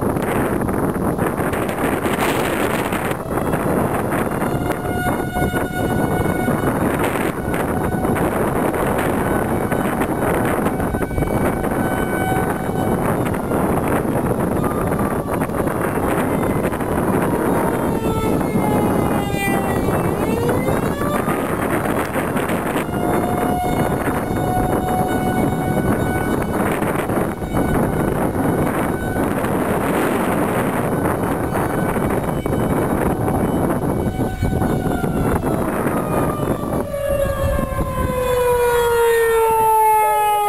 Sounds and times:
Siren: 0.0 - 40.4.

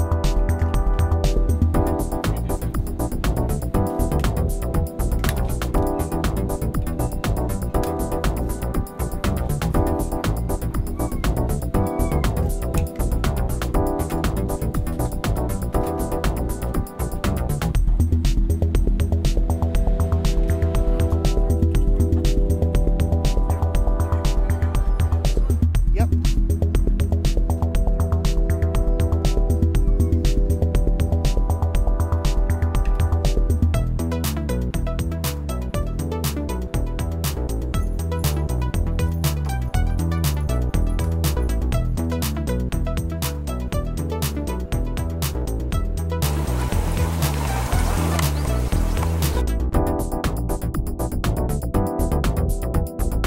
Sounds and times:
Music: 0.0 - 53.2.

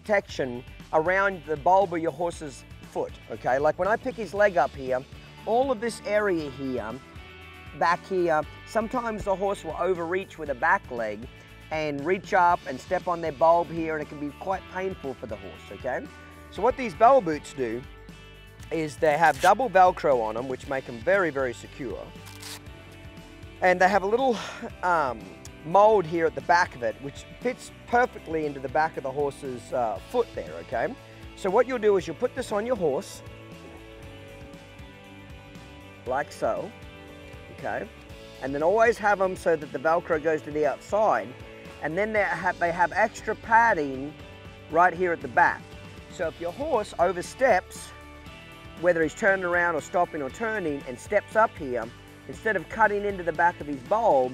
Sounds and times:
Speech: 0.0 - 7.0, 7.8 - 17.8, 18.7 - 22.1, 23.6 - 33.2, 36.0 - 36.7, 37.5 - 44.1, 44.7 - 47.9, 48.8 - 54.3
Music: 0.0 - 54.3.

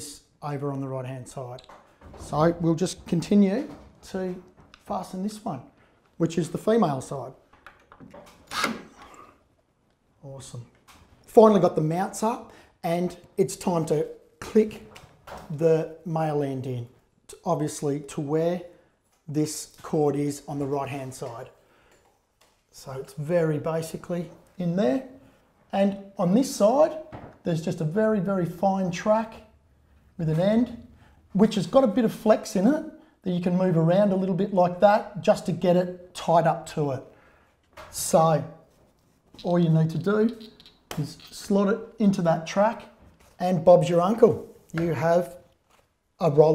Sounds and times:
Speech: 0.0 - 7.4, 10.2 - 18.7, 19.3 - 21.6, 22.7 - 29.5, 30.2 - 37.1, 37.9 - 38.6, 39.4 - 45.4, 46.2 - 46.5
Inside, small room: 0.0 - 46.5.

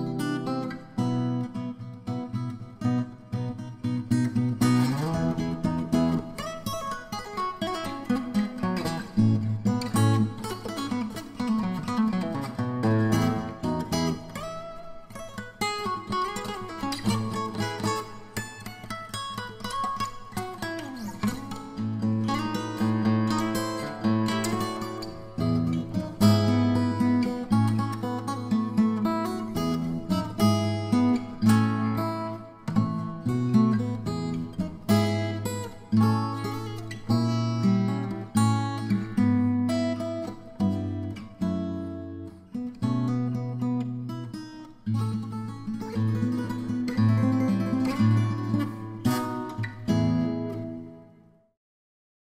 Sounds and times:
Acoustic guitar: 0.0 - 51.5.

